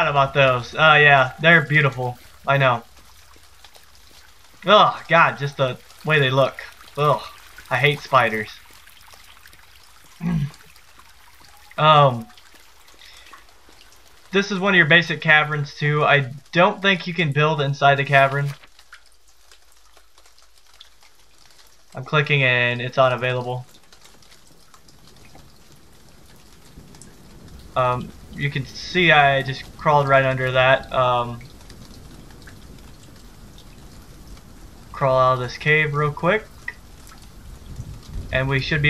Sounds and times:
Speech: 0.0s - 2.9s, 4.6s - 8.6s, 10.2s - 10.6s, 11.8s - 12.3s, 14.4s - 18.6s, 22.0s - 23.7s, 27.8s - 31.4s, 35.0s - 36.7s, 38.3s - 38.8s.

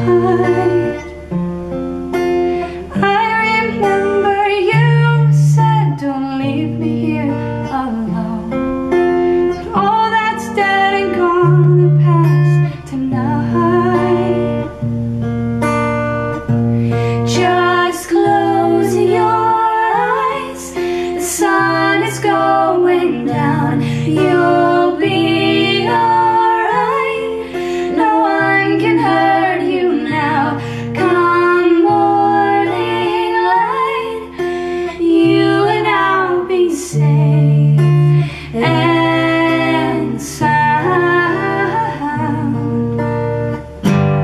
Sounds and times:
Music: 0.0s - 44.2s.

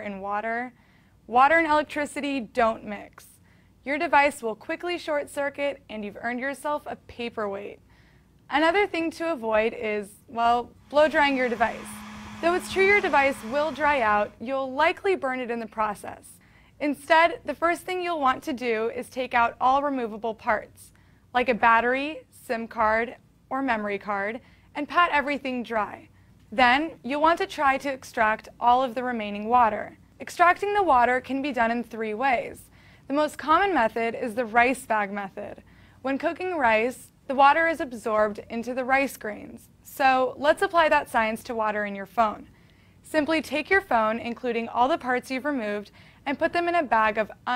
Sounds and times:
Speech: 0.0s - 7.8s, 8.5s - 11.8s, 12.4s - 42.5s, 43.1s - 47.5s.

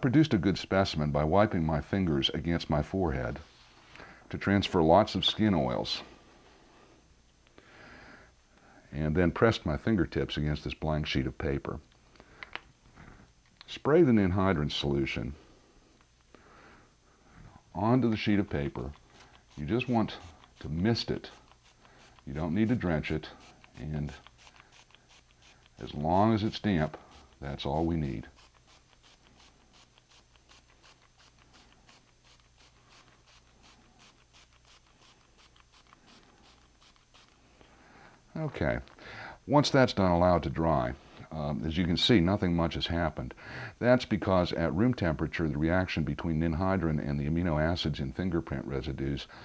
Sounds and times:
Speech: 0.0s - 3.5s, 4.3s - 6.1s, 8.9s - 11.8s, 13.6s - 15.4s, 17.8s - 19.0s, 19.6s - 21.3s, 22.3s - 24.3s, 25.8s - 28.3s, 38.3s - 38.9s, 39.5s - 49.3s
Inside, small room: 0.0s - 49.4s.

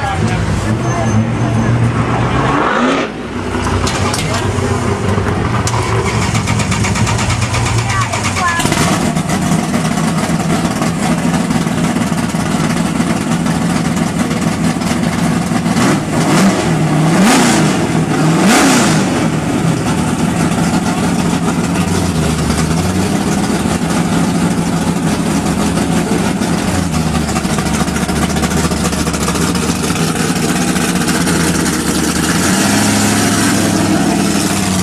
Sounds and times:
Vehicle: 0.0s - 34.8s.

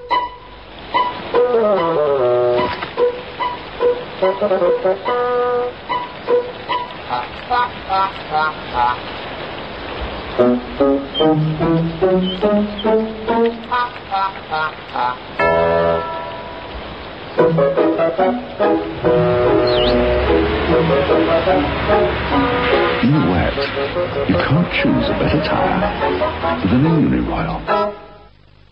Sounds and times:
Music: 0.0s - 8.4s, 10.4s - 16.8s, 17.4s - 28.7s
Speech: 23.0s - 23.7s, 24.3s - 25.9s, 26.6s - 27.7s.

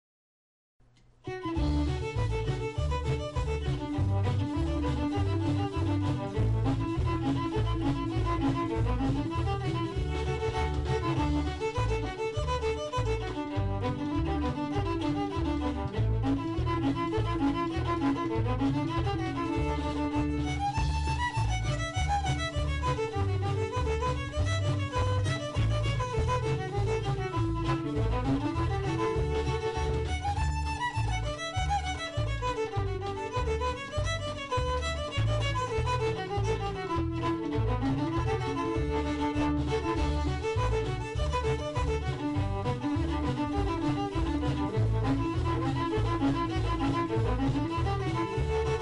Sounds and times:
Violin, fiddle: 1.3s - 48.8s.

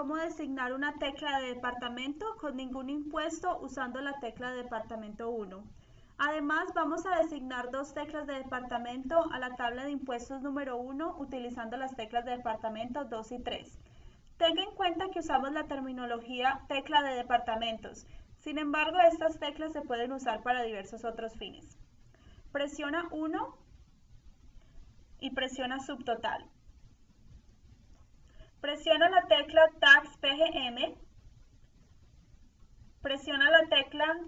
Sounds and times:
Speech: 0.0s - 13.8s, 14.4s - 21.8s, 22.6s - 23.6s, 25.2s - 26.5s, 28.6s - 31.0s, 33.1s - 34.2s.

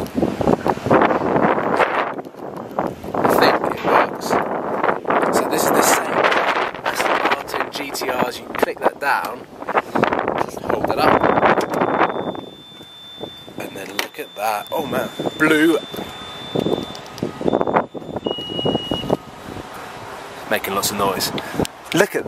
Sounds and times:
Outside, urban or manmade: 0.0s - 22.2s
Speech: 3.3s - 4.4s, 5.3s - 6.2s, 6.8s - 9.4s, 10.4s - 11.2s, 13.6s - 15.9s, 20.5s - 22.2s.

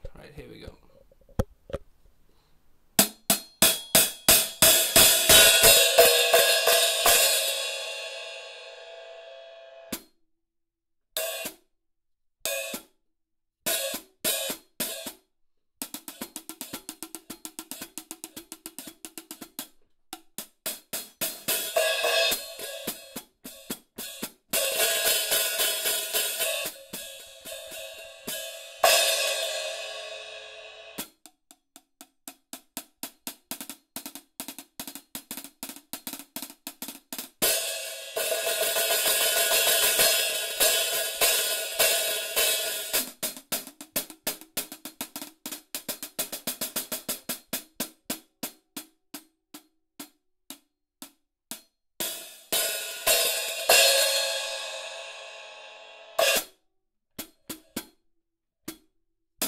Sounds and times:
Inside, small room: 0.0s - 59.4s.

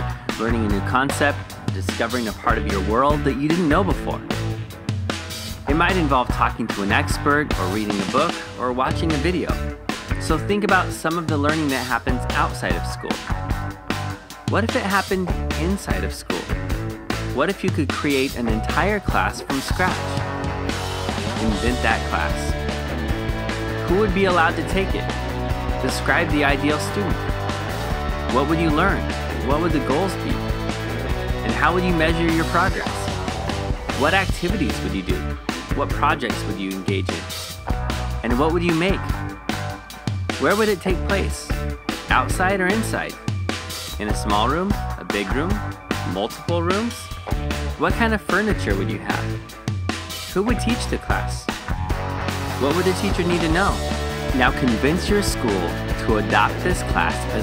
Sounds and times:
Music: 0.0s - 57.4s
Speech: 0.3s - 4.4s, 5.6s - 13.3s, 14.5s - 16.6s, 17.4s - 20.2s, 21.3s - 22.5s, 23.8s - 25.1s, 25.8s - 27.2s, 28.3s - 30.4s, 31.4s - 33.1s, 33.9s - 37.3s, 38.2s - 39.2s, 40.4s - 43.2s, 43.9s - 47.2s, 47.8s - 49.5s, 50.3s - 51.5s, 52.6s - 57.4s.

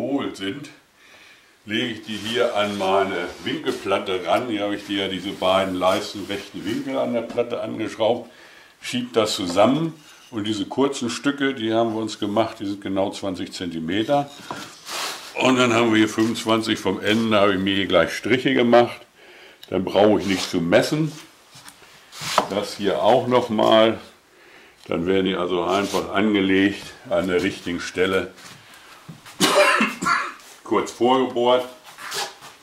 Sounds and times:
Speech: 0.0s - 0.8s, 1.7s - 14.4s, 15.4s - 19.1s, 19.7s - 21.3s, 22.4s - 24.2s, 24.9s - 28.4s, 30.6s - 31.9s
Wood: 14.3s - 14.8s, 22.3s - 22.7s.

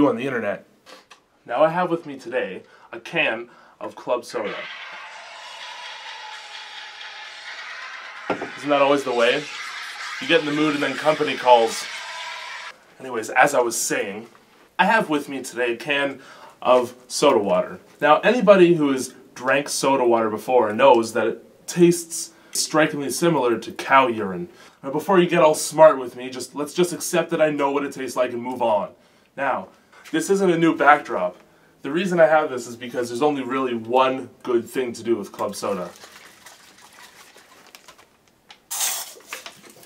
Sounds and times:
Speech: 0.0s - 0.6s, 1.5s - 4.7s, 8.6s - 9.5s, 10.2s - 11.9s, 13.0s - 35.9s.

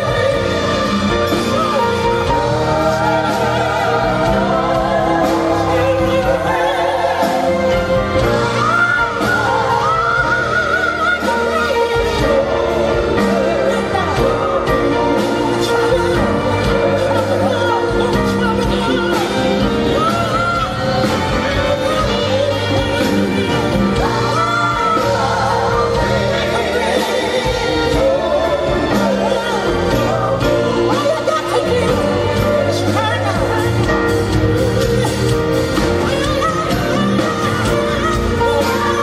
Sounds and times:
Gospel music: 0.0s - 39.0s.

